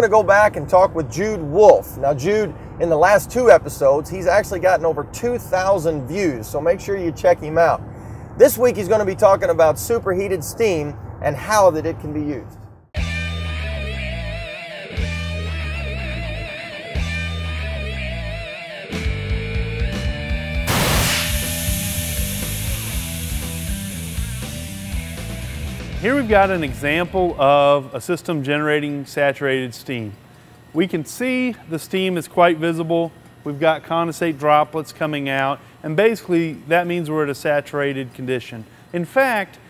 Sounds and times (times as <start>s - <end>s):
Speech: 0.0s - 7.8s, 8.4s - 12.6s, 26.0s - 30.2s, 30.8s - 39.6s
Music: 13.0s - 29.0s.